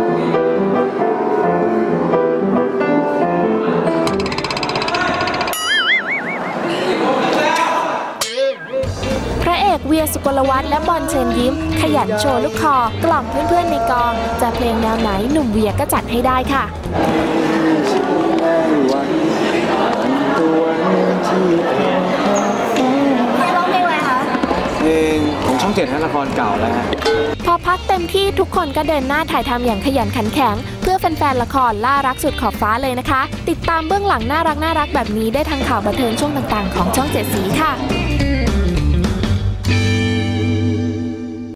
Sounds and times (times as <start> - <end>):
Steel guitar, slide guitar: 10.7 - 15.0, 37.7 - 41.5
Speech: 27.5 - 37.8.